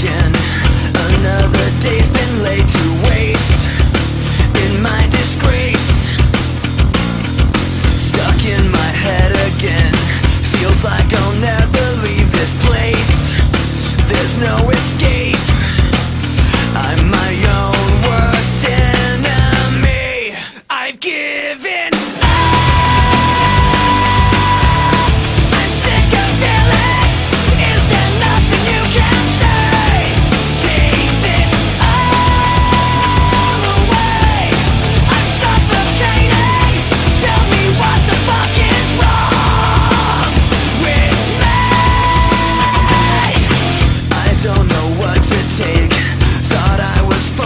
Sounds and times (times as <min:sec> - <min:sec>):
Music: 0:00.0 - 0:21.0, 0:21.6 - 0:47.4.